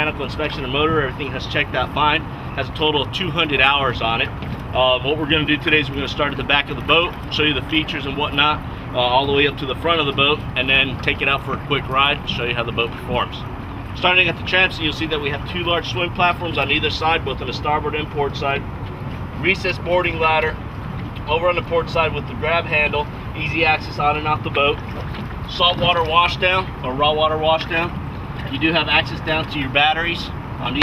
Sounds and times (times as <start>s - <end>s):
Speech: 0.0s - 13.4s, 14.0s - 18.6s, 19.4s - 20.6s, 21.2s - 24.8s, 25.5s - 30.8s
Motorboat, speedboat: 0.0s - 30.8s.